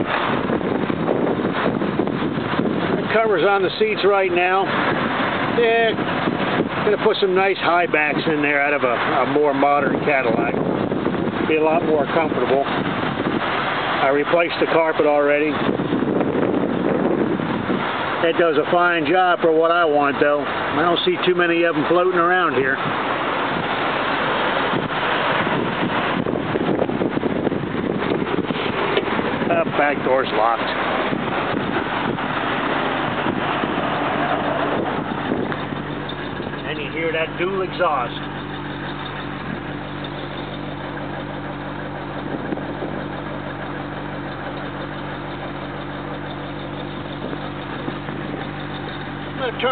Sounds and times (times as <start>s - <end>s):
Car: 0.0s - 49.7s
Outside, urban or manmade: 0.0s - 49.7s
Speech: 3.0s - 4.7s, 5.5s - 6.0s, 6.8s - 10.6s, 11.4s - 12.7s, 14.0s - 15.6s, 18.2s - 22.8s, 29.5s - 30.8s, 36.6s - 38.3s, 49.4s - 49.7s.